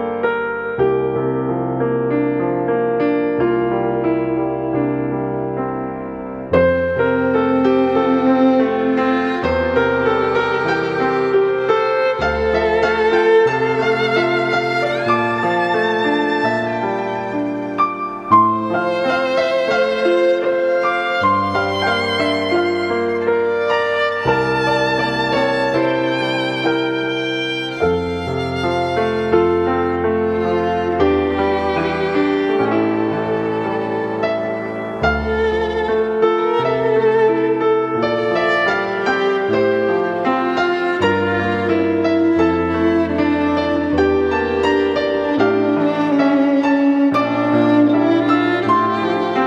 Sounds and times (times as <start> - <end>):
Violin, fiddle: 6.6 - 49.4.